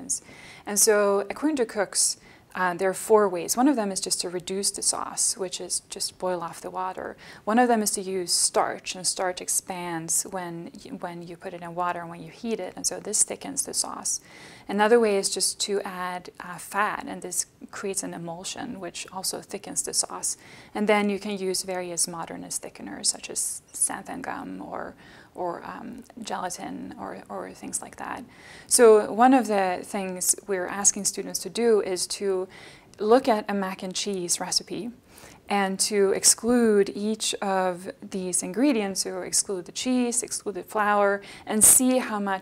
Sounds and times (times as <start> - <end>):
Speech: 0.0 - 42.4.